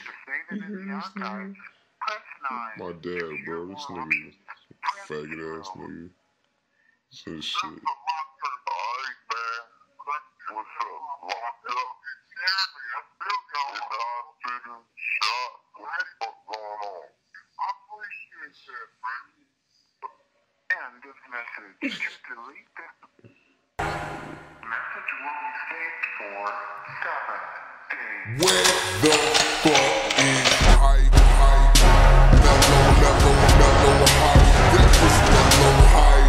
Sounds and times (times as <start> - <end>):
Speech: 0.0 - 6.1, 7.2 - 31.0
Music: 23.8 - 24.9, 28.3 - 36.2.